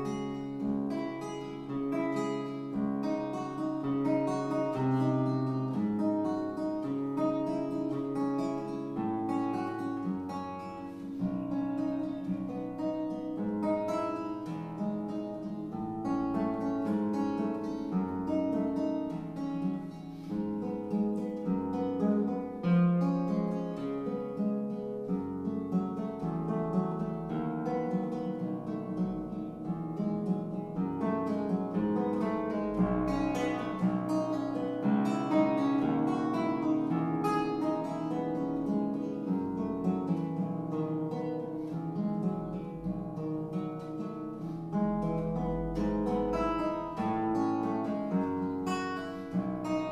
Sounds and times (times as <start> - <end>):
Guitar: 0.0 - 49.9.